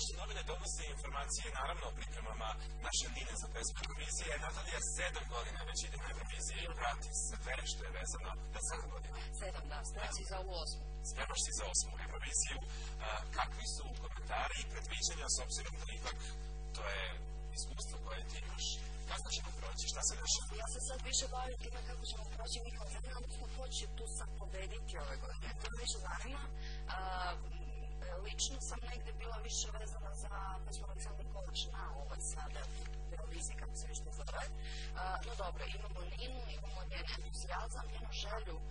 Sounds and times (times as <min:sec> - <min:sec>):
Speech: 0:00.0 - 0:38.7.